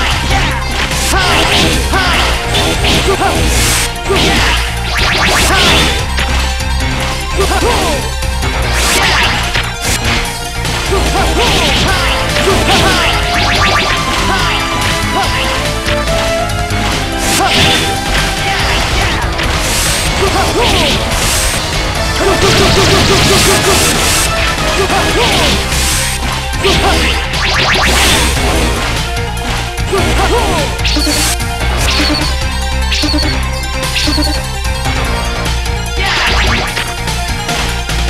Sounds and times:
Music: 0.0 - 38.0.

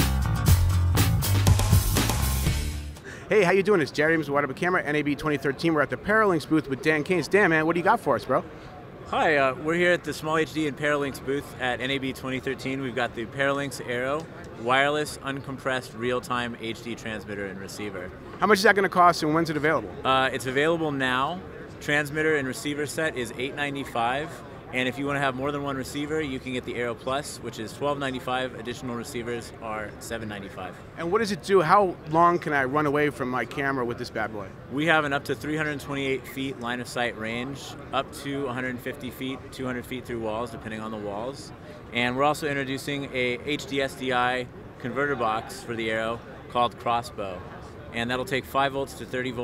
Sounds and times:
Speech: 3.3 - 49.4.

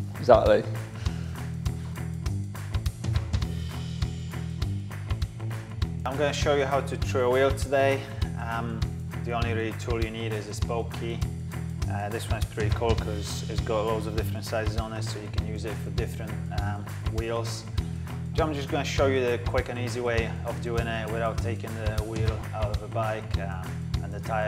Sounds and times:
Music: 0.0 - 24.4
Speech: 0.2 - 0.8, 6.1 - 11.3, 11.9 - 17.7, 18.4 - 24.4.

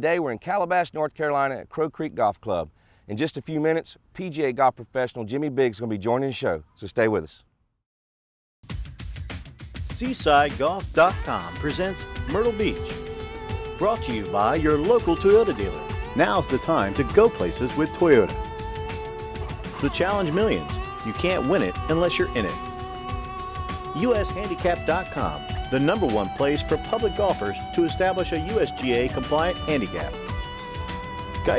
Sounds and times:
Speech: 0.0 - 7.5, 9.9 - 12.9, 13.8 - 18.3, 19.8 - 22.6, 24.0 - 30.2
Music: 8.6 - 31.5.

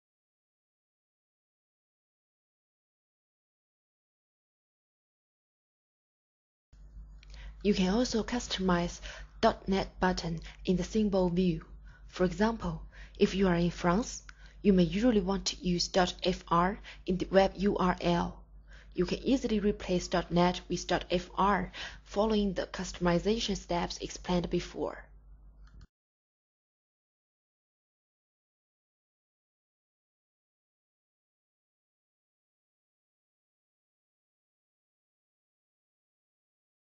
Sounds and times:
Speech: 7.6 - 18.4, 19.0 - 25.1.

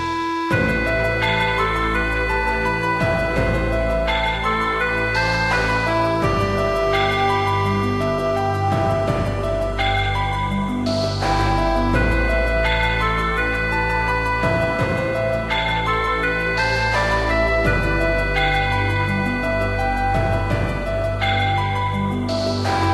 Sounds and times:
Video game music: 0.0 - 22.9.

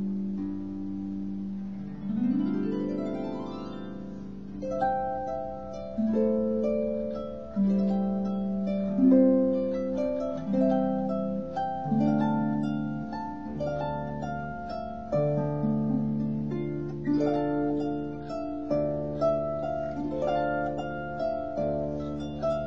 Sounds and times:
Harp: 0.0 - 22.6.

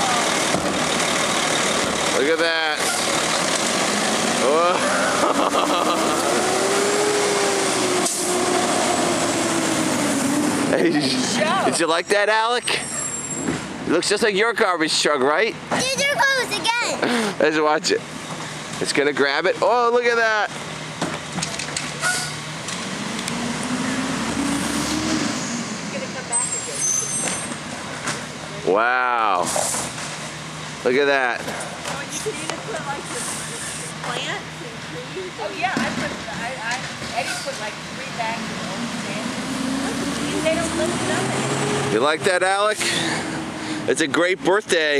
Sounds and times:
Truck: 0.0 - 44.9.

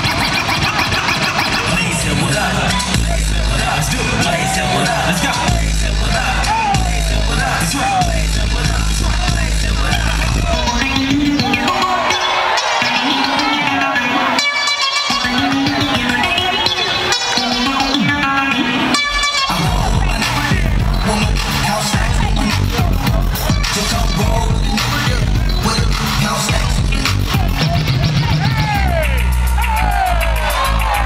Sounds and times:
Music: 0.0 - 31.0.

